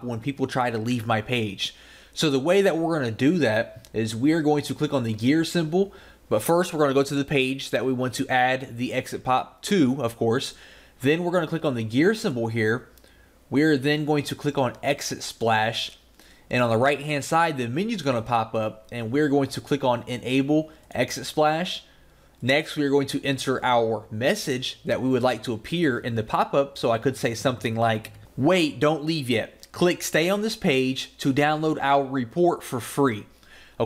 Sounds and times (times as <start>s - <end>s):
Speech: 0.0s - 12.9s, 13.5s - 33.8s.